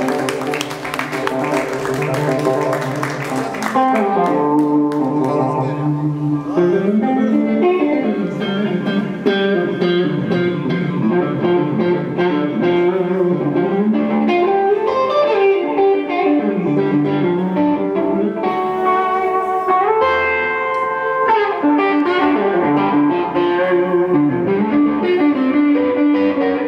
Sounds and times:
Bass guitar: 0.0s - 26.6s.

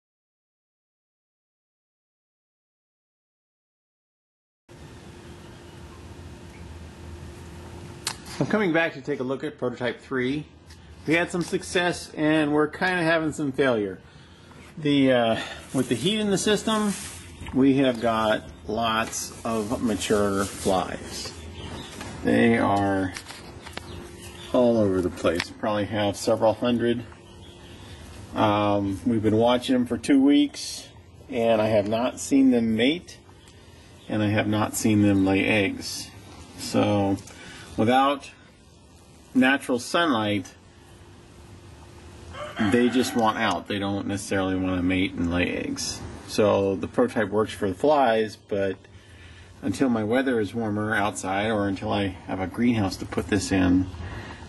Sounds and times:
Speech: 8.4s - 14.0s, 14.8s - 21.4s, 22.2s - 23.3s, 24.5s - 27.1s, 28.3s - 33.2s, 34.1s - 38.4s, 39.4s - 40.6s, 42.6s - 48.9s, 49.6s - 54.0s.

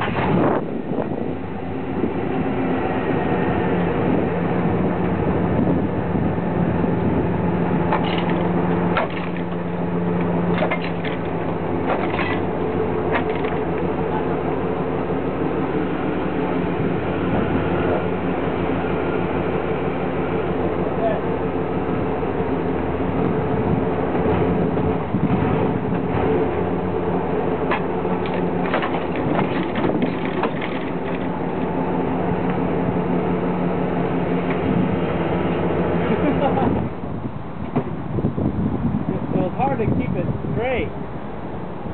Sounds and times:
Truck: 0.0s - 41.9s.

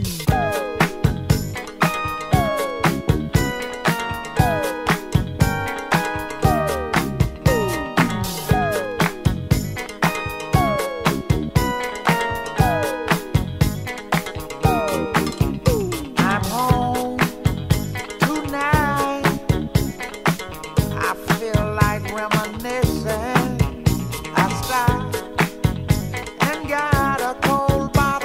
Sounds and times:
Funk: 0.0s - 28.2s.

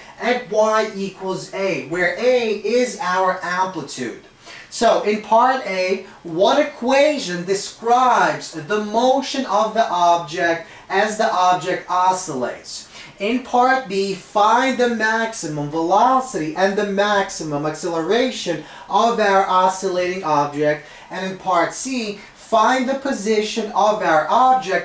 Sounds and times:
Speech: 0.0s - 24.8s.

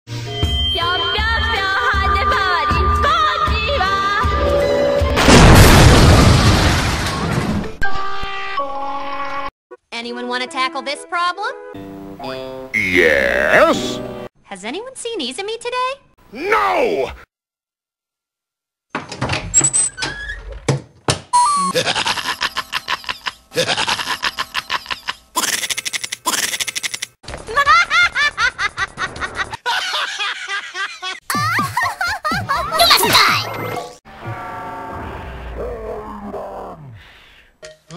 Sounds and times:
Laughter: 21.7s - 26.8s, 27.4s - 32.8s.

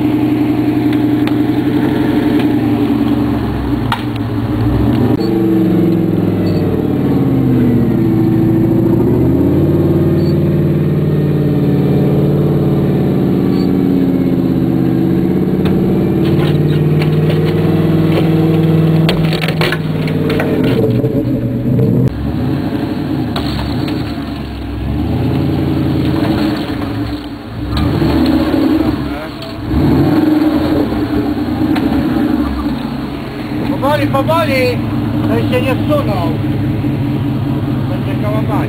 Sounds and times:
Accelerating, revving, vroom: 0.0s - 4.0s, 4.6s - 32.8s
Idling: 0.0s - 22.3s, 28.7s - 38.6s
Car: 0.0s - 38.6s.

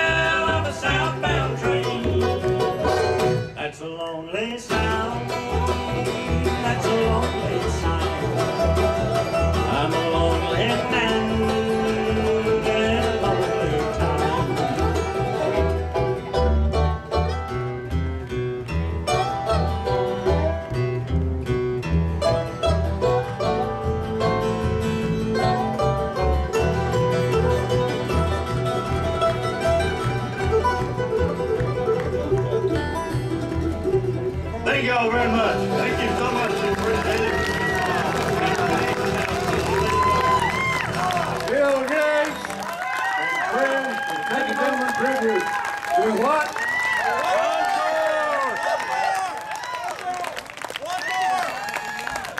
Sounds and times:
Bluegrass: 0.0s - 52.3s.

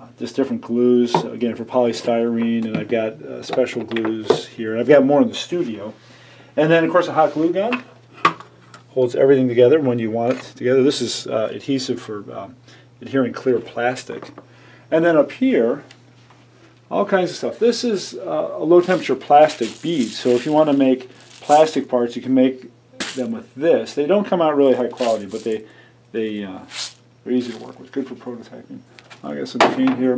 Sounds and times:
Speech: 0.0s - 6.0s, 6.6s - 7.9s, 8.9s - 15.9s, 16.9s - 30.1s.

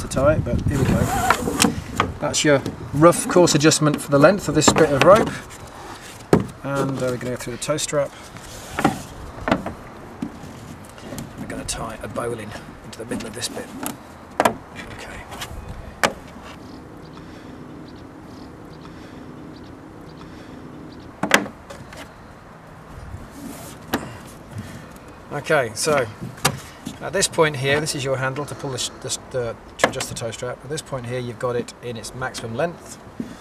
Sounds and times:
Speech: 0.0s - 1.2s, 2.2s - 5.4s, 6.6s - 8.1s, 11.5s - 13.8s, 25.3s - 26.2s, 27.0s - 33.0s.

